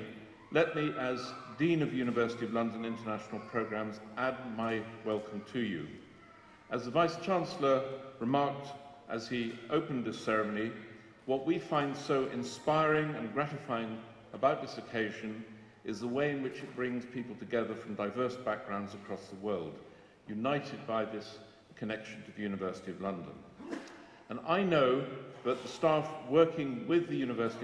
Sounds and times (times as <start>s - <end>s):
Male speech, man speaking: 0.0s - 6.0s, 6.7s - 23.5s, 24.3s - 27.6s
Narration, monologue: 0.0s - 27.6s.